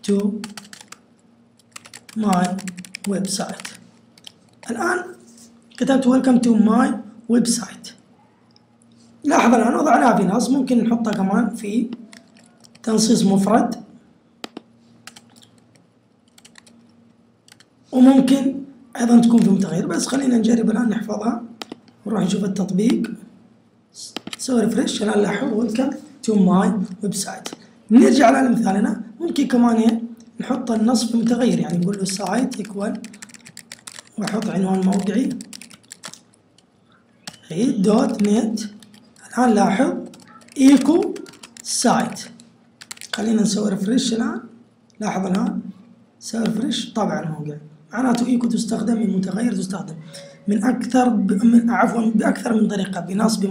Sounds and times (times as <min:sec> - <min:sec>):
Speech: 0:00.0 - 0:00.5, 0:02.1 - 0:03.8, 0:04.7 - 0:08.0, 0:09.2 - 0:12.0, 0:12.8 - 0:14.0, 0:17.9 - 0:23.3, 0:24.0 - 0:33.1, 0:34.2 - 0:35.5, 0:37.4 - 0:42.4, 0:43.2 - 0:53.5.